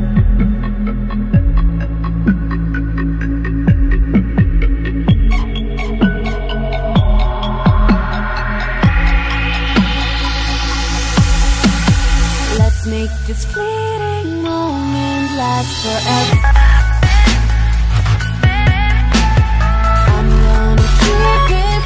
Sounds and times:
Music: 0:00.0 - 0:21.8.

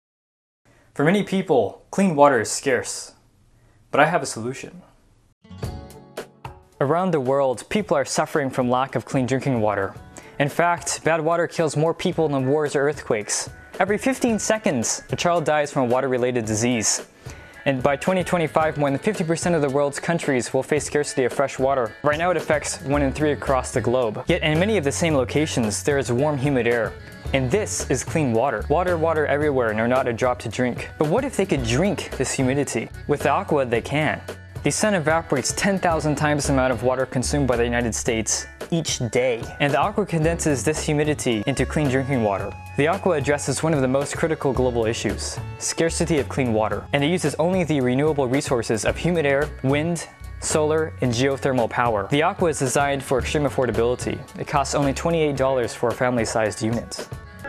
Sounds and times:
Speech: 0:01.0 - 0:03.2, 0:03.9 - 0:04.9, 0:06.8 - 0:17.1, 0:17.7 - 0:57.1
Music: 0:05.4 - 0:57.4.

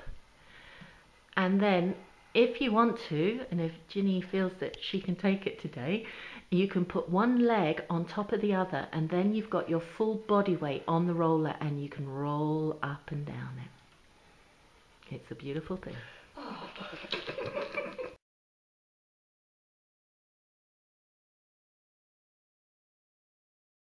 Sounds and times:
Speech: 0:01.4 - 0:13.8, 0:15.0 - 0:16.2.

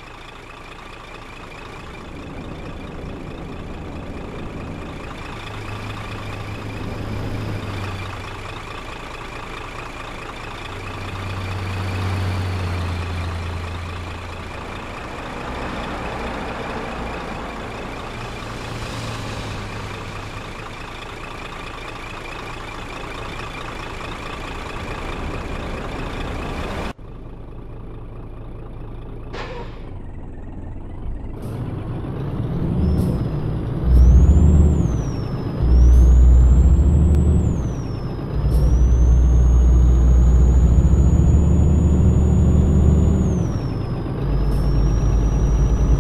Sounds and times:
Truck: 0:00.0 - 0:46.0.

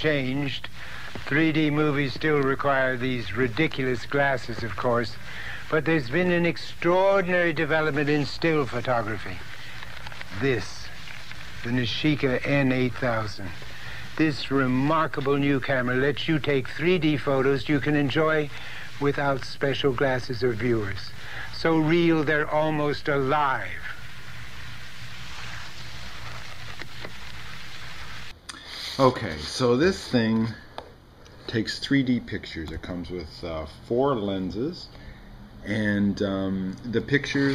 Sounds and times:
Speech: 0:00.0 - 0:09.4, 0:10.3 - 0:11.0, 0:11.6 - 0:13.6, 0:14.2 - 0:24.0, 0:29.0 - 0:30.7, 0:31.5 - 0:34.9, 0:35.6 - 0:37.5.

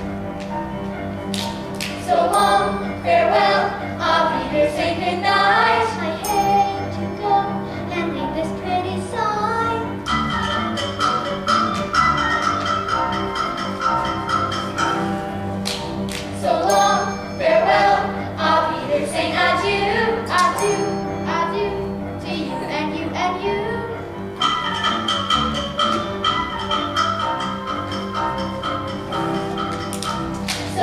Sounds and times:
Music: 0:00.0 - 0:30.8.

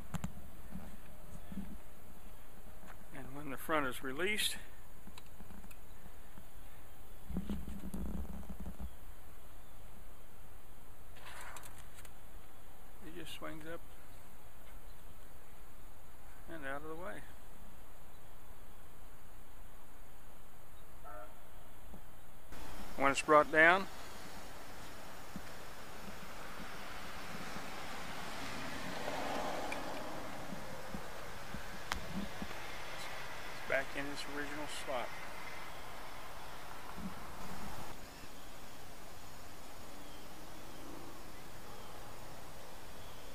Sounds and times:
Speech: 0:03.2 - 0:04.7, 0:13.0 - 0:13.8, 0:16.5 - 0:17.4, 0:23.0 - 0:23.9, 0:33.7 - 0:35.1.

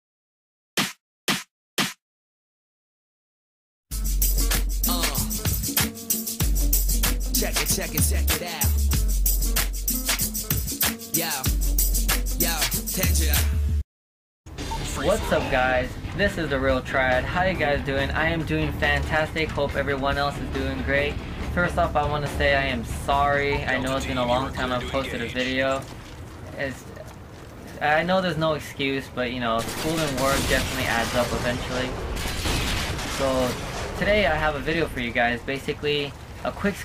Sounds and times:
Music: 0:03.9 - 0:13.8, 0:14.5 - 0:25.1.

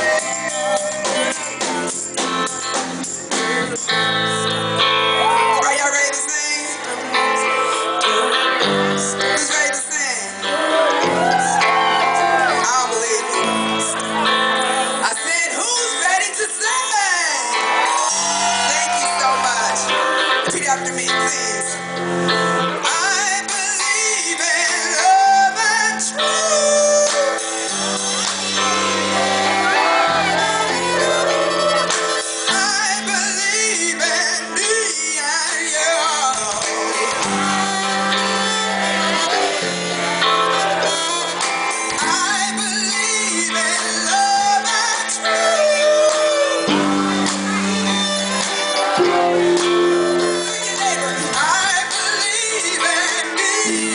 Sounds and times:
Inside, large room or hall: 0:00.0 - 0:53.9
Music: 0:00.0 - 0:53.9
Shout: 0:05.1 - 0:06.0, 0:10.6 - 0:13.6, 0:16.7 - 0:20.0, 0:28.8 - 0:32.0.

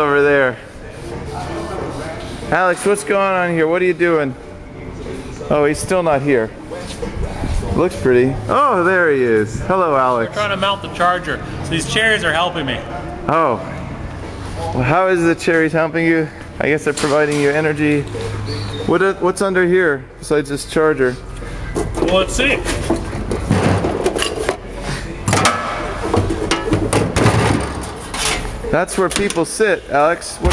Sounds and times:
Inside, large room or hall: 0:00.0 - 0:30.5.

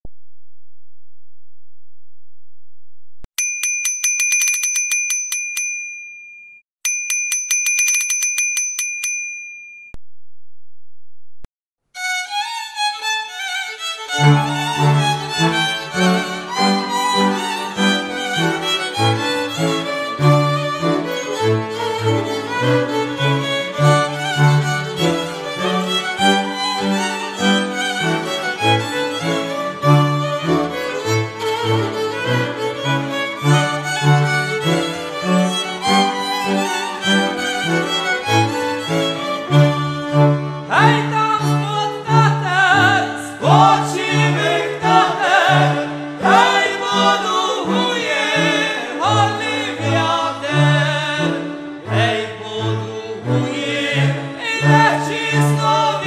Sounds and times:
Bicycle bell: 0:03.4 - 0:10.0.

